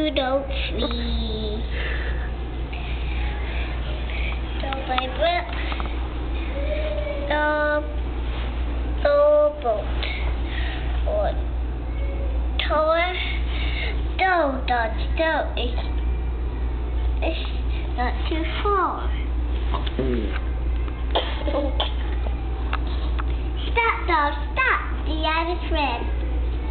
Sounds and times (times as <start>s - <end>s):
Speech: 20.0s - 20.4s.